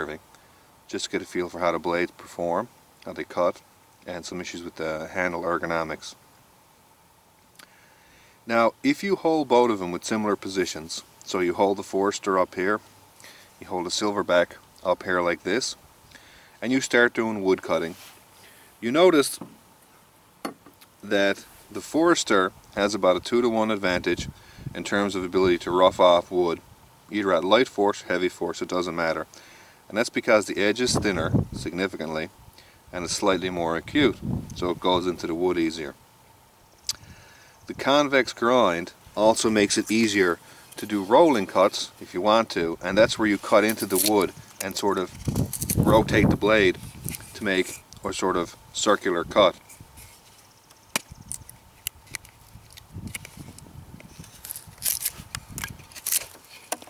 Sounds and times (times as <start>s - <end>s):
Speech: 0.0s - 0.2s, 0.9s - 6.2s, 8.5s - 12.8s, 13.6s - 15.8s, 16.6s - 18.0s, 18.8s - 19.4s, 21.0s - 29.3s, 29.9s - 32.3s, 32.9s - 36.0s, 37.7s - 45.2s, 45.8s - 49.6s.